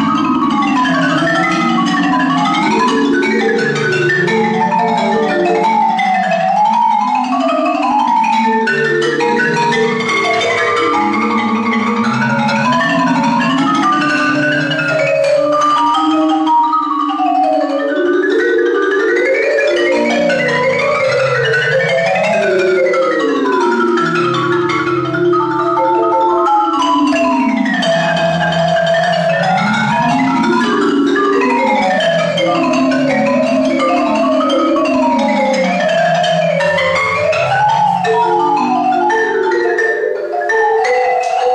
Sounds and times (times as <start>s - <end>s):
Percussion: 0.0s - 41.5s.